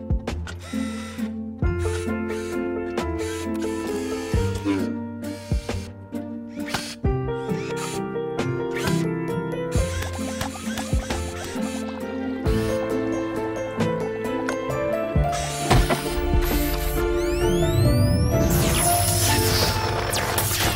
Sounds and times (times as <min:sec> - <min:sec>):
Music: 0:00.0 - 0:20.7.